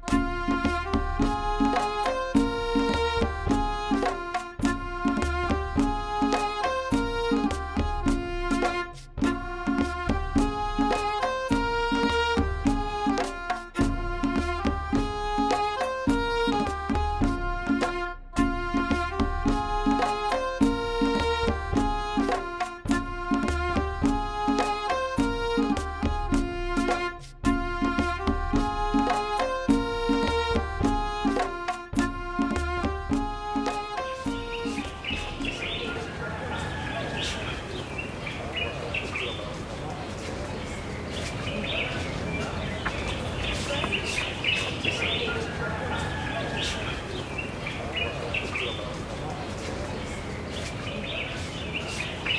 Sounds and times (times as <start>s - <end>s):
Traditional music: 0.0s - 52.3s.